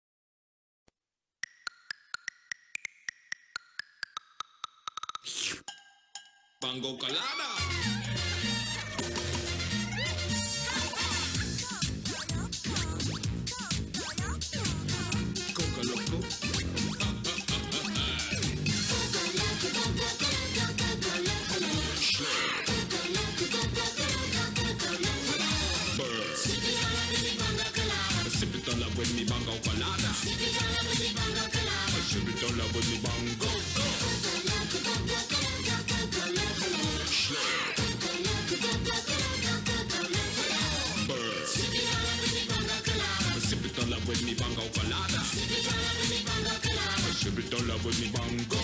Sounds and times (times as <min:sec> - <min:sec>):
Music: 0:05.7 - 0:48.6.